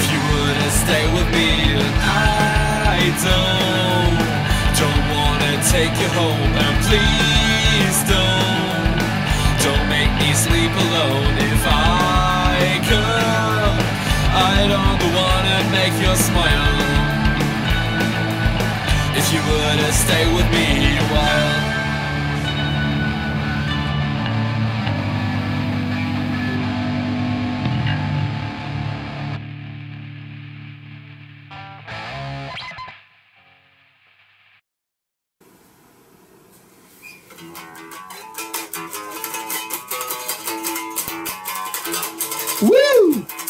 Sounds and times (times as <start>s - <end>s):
Guitar: 0.0s - 34.6s, 37.0s - 43.4s.